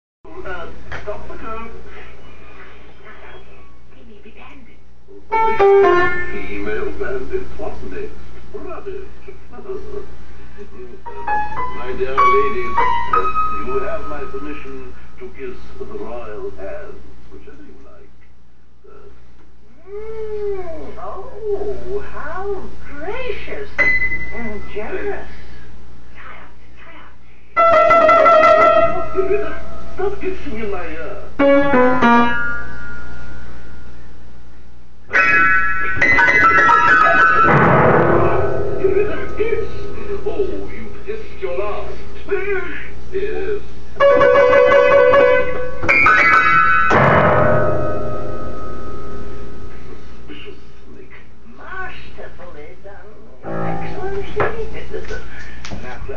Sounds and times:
Music: 0:05.4 - 0:06.6, 0:11.1 - 0:14.8, 0:27.6 - 0:30.0, 0:31.4 - 0:32.8, 0:35.2 - 0:39.8, 0:44.0 - 0:48.6.

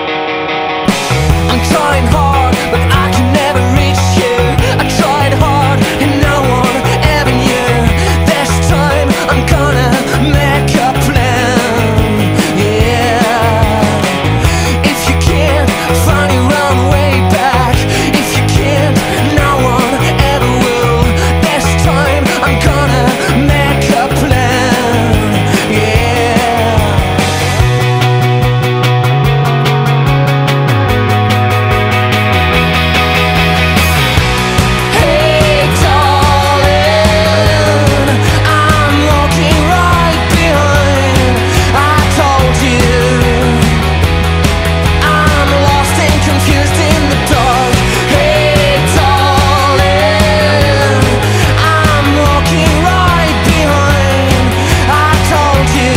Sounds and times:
Independent music: 0:00.0 - 0:55.9.

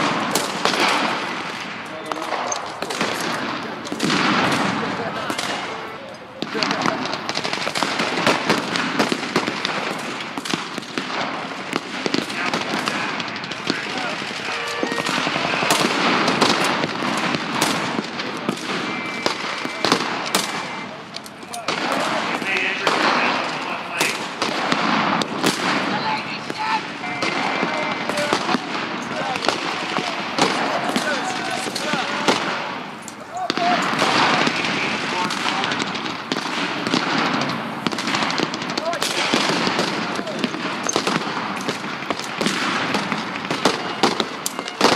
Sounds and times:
Speech: 0:01.9 - 0:04.0, 0:04.8 - 0:07.1, 0:25.9 - 0:32.4, 0:33.2 - 0:35.8, 0:38.8 - 0:39.3, 0:40.2 - 0:40.5.

